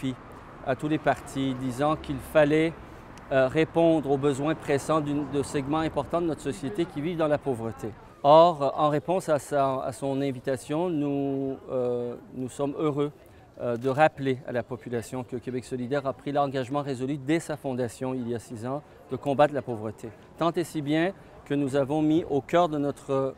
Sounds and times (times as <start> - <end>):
Speech: 0.0 - 23.3.